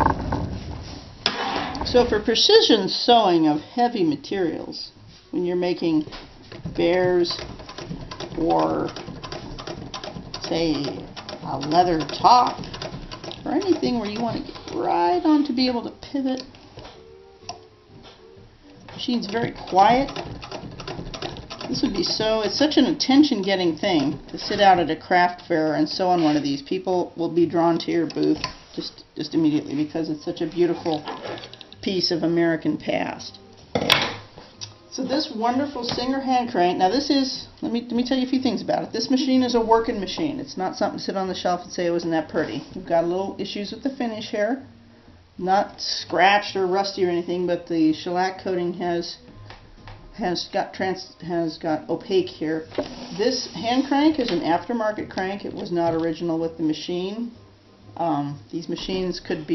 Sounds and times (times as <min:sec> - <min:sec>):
Speech: 0:01.8 - 0:06.2, 0:06.8 - 0:07.4, 0:08.4 - 0:09.0, 0:10.4 - 0:12.6, 0:13.4 - 0:16.5, 0:19.0 - 0:20.2, 0:21.7 - 0:31.2, 0:31.8 - 0:33.4, 0:34.9 - 0:44.7, 0:45.4 - 0:49.2, 0:50.2 - 0:57.4, 0:58.0 - 0:59.5
Sewing machine: 0:07.3 - 0:14.8, 0:19.4 - 0:24.8.